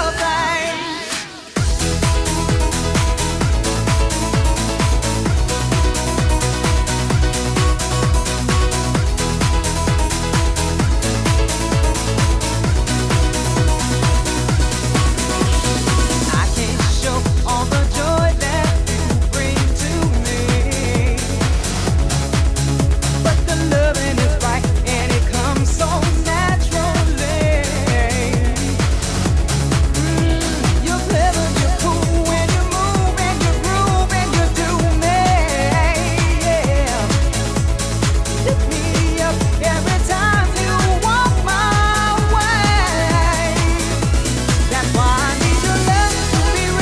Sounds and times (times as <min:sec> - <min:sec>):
Music: 0:00.0 - 0:46.8.